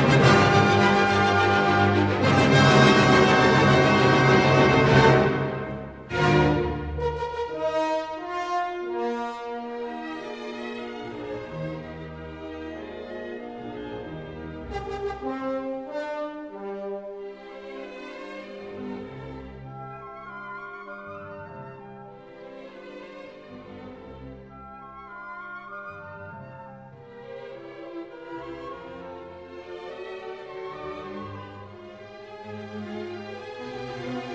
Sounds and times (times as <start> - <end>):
Music: 0.0 - 34.3.